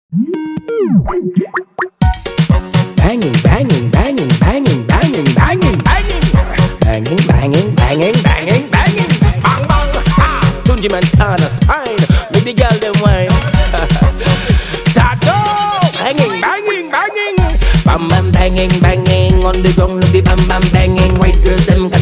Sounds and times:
Music: 0.4s - 22.0s.

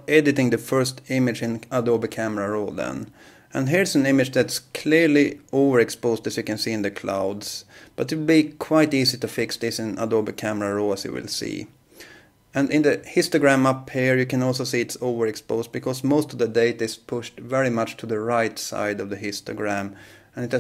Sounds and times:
Speech: 0.0s - 11.8s, 12.6s - 20.6s.

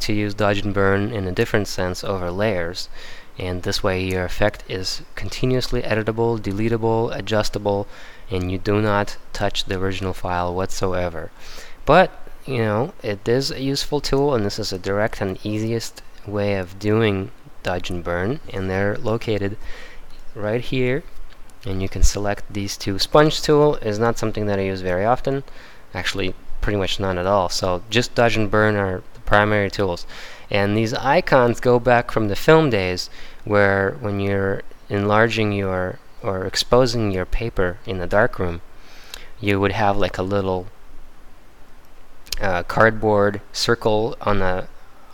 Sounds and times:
Speech: 0.0s - 19.6s, 20.3s - 38.7s, 39.4s - 40.8s, 42.3s - 44.8s.

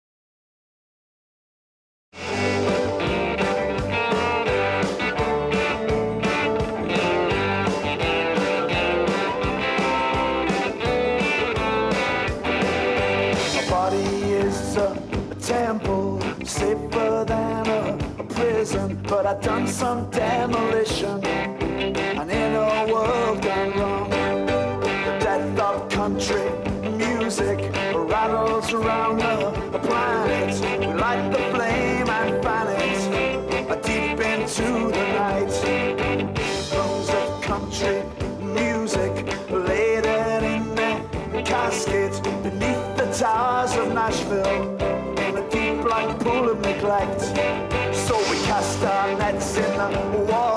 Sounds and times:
Country: 2.2s - 50.5s.

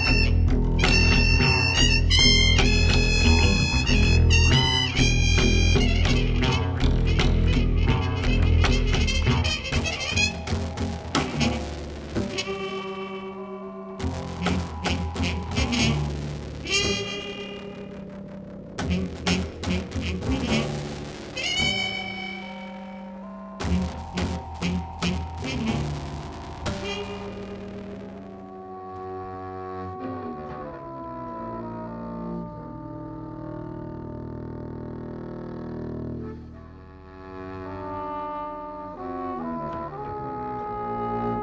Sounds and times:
Double bass: 0.0s - 17.4s, 29.1s - 41.4s
Jazz: 0.0s - 41.4s.

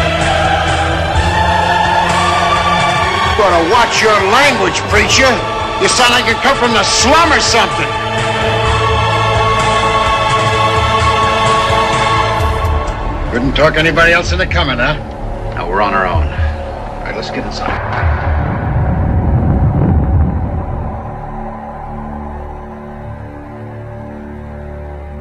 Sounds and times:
Music: 0.0s - 25.2s.

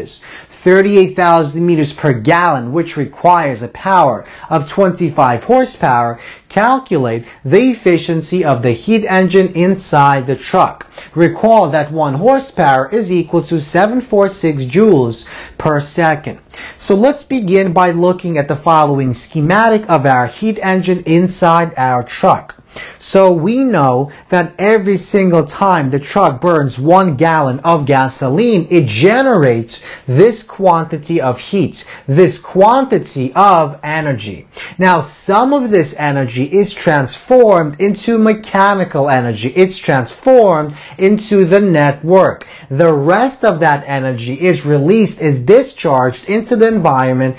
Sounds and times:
Speech: 0.0s - 47.3s.

